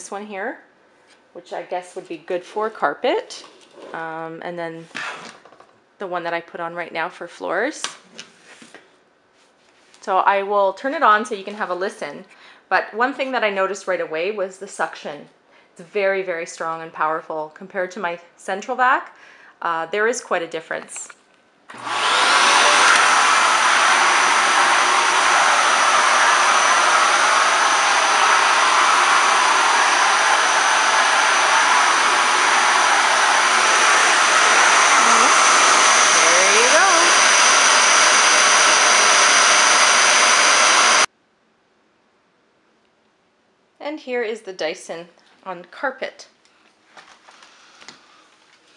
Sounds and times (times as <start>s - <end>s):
Vacuum cleaner: 21.7s - 41.1s.